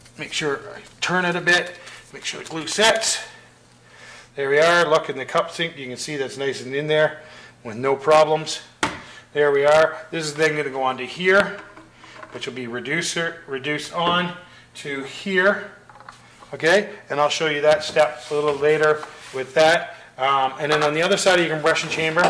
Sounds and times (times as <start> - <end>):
Speech: 0.2 - 3.4, 4.4 - 8.7, 9.4 - 11.6, 12.4 - 15.8, 16.5 - 22.2.